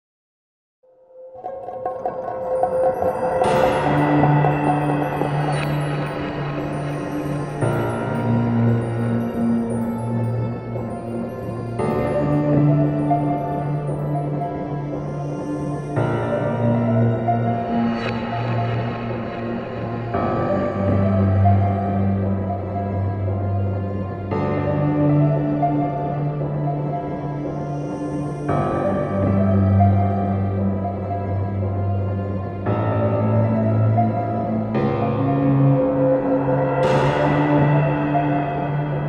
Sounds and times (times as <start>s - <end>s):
Music: 0.8s - 39.0s.